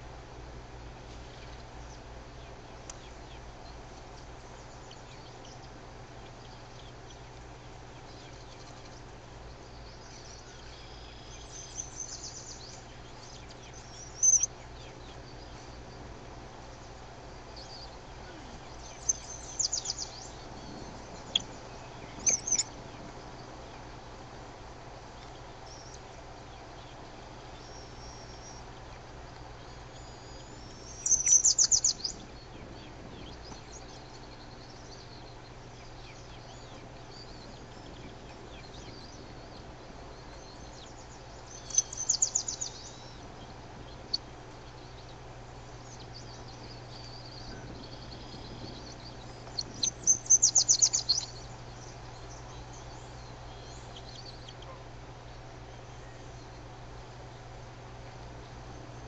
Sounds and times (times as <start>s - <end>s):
Environmental noise: 0.0s - 59.0s
Outside, rural or natural: 0.0s - 59.0s
Bird: 1.1s - 24.3s, 25.0s - 59.0s.